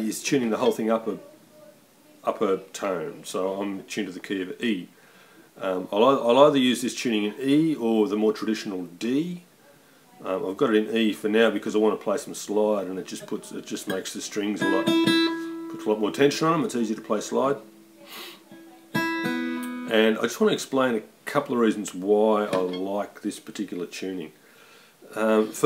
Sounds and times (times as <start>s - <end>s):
Speech: 0.0s - 4.9s, 5.6s - 14.9s, 15.7s - 18.9s, 19.9s - 24.4s, 25.1s - 25.6s.